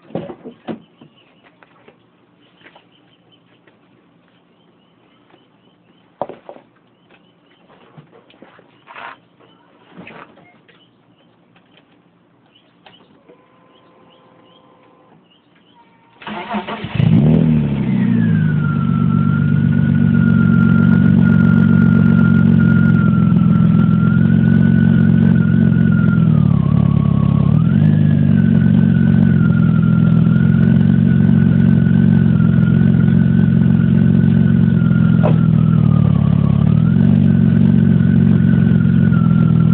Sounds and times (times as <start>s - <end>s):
Car: 16.2s - 39.7s.